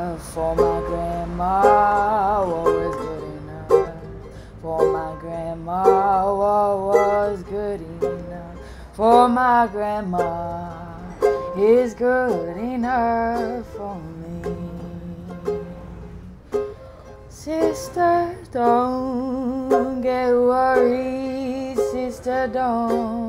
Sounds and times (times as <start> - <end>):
Ukulele: 0.0 - 23.2.